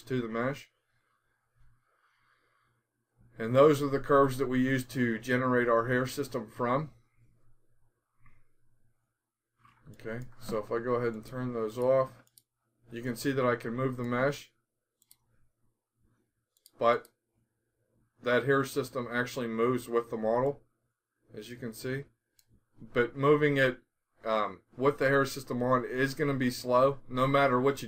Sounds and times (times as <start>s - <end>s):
Speech: 0.0s - 0.8s, 3.4s - 7.0s, 10.0s - 12.2s, 12.9s - 14.6s, 16.8s - 17.0s, 18.2s - 20.6s, 21.3s - 22.1s, 22.8s - 27.8s
Inside, small room: 0.0s - 27.8s.